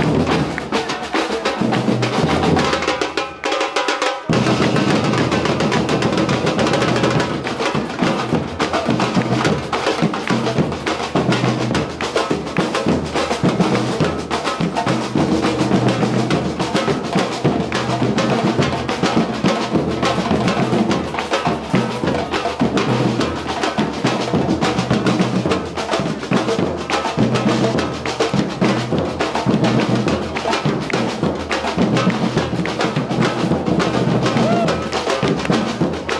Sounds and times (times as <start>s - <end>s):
Music: 0.0s - 36.1s.